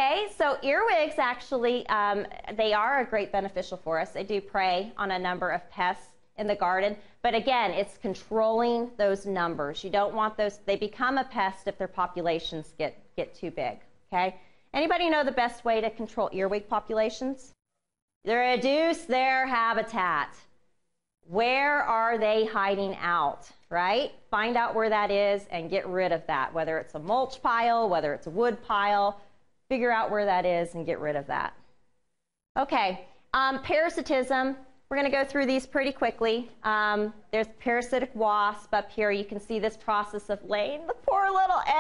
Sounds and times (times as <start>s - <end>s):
Speech: 0.0s - 17.6s, 18.3s - 20.4s, 21.3s - 31.6s, 32.6s - 41.8s.